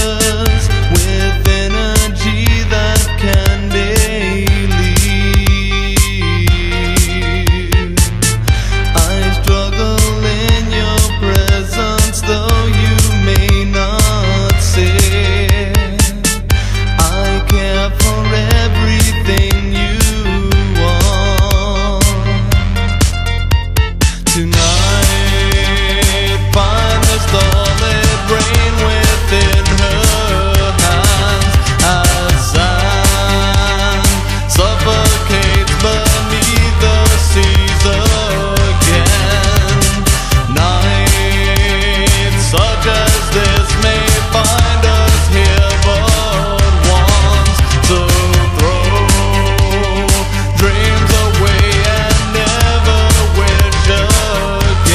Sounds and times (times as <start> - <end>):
Music: 0.0 - 54.9.